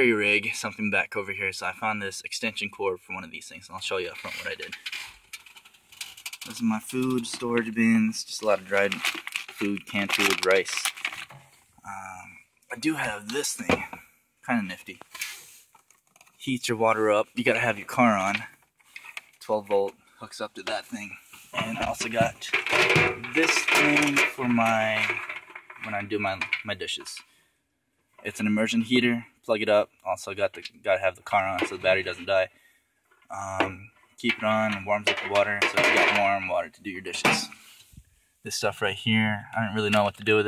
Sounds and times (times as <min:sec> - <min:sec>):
Speech: 0:00.0 - 0:04.8, 0:06.4 - 0:11.0, 0:11.8 - 0:15.0, 0:16.4 - 0:18.6, 0:19.4 - 0:25.2, 0:25.8 - 0:27.2, 0:28.2 - 0:32.5, 0:33.3 - 0:37.6, 0:38.5 - 0:40.4.